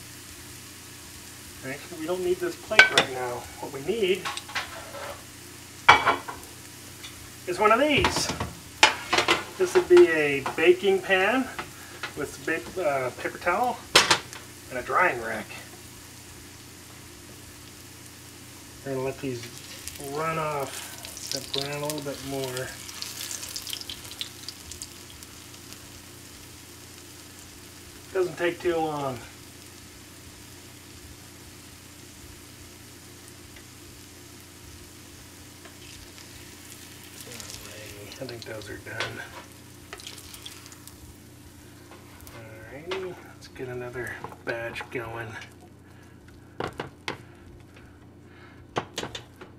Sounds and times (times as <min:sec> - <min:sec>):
Frying (food): 0:00.0 - 0:49.5
Speech: 0:01.6 - 0:04.3, 0:07.5 - 0:08.4, 0:09.6 - 0:11.6, 0:12.2 - 0:13.8, 0:14.7 - 0:15.7, 0:18.8 - 0:20.8, 0:21.4 - 0:22.8, 0:28.1 - 0:29.3, 0:37.3 - 0:39.4, 0:42.3 - 0:45.5.